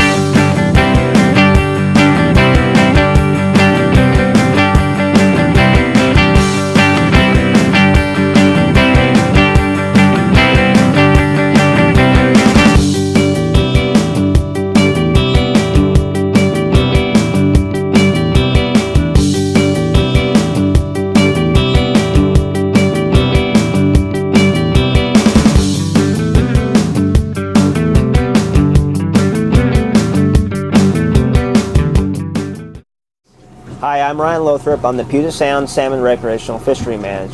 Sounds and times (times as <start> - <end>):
Music: 0.0 - 33.6.